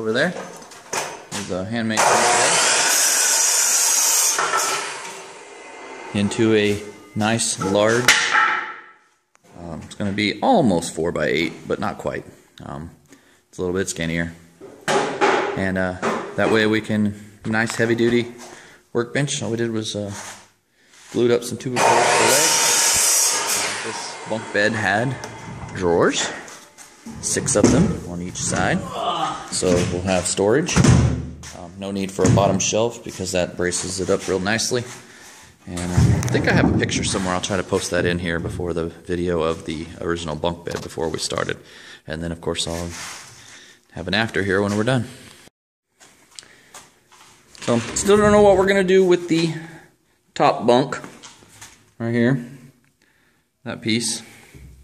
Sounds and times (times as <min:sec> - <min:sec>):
Sawing: 0:02.0 - 0:08.0, 0:21.7 - 0:28.8.